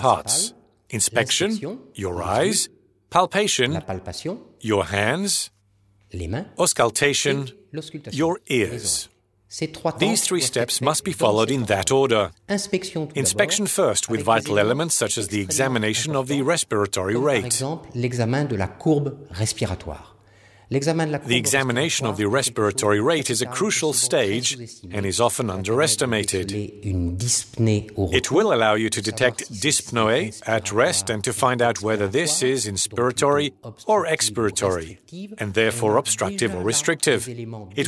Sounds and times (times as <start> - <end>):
Speech: 0.0 - 5.5, 6.1 - 37.8.